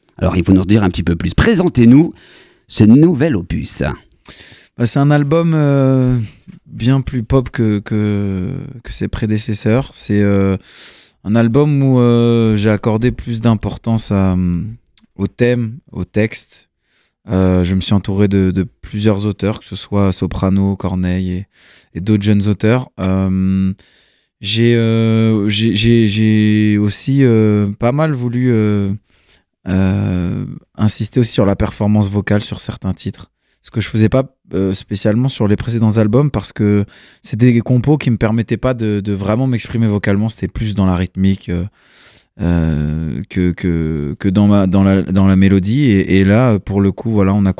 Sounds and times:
Speech: 0.2s - 4.1s, 4.8s - 10.6s, 11.2s - 16.7s, 17.3s - 23.8s, 24.4s - 29.0s, 29.7s - 41.8s, 42.4s - 47.5s.

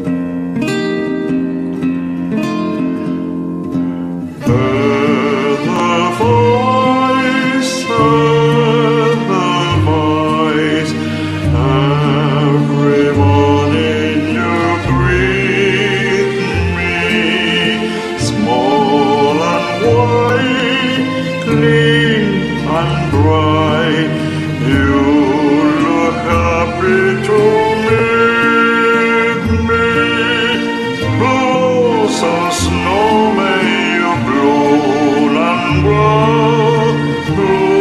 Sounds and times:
Tender music: 1.3s - 37.8s.

